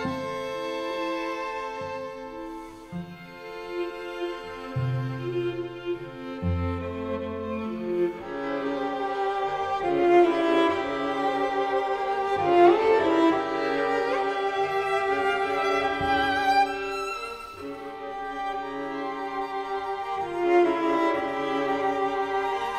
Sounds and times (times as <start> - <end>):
Cello: 0.0 - 22.7
Classical music: 0.0 - 22.7
Orchestra: 0.0 - 22.7
Violin, fiddle: 0.0 - 22.7.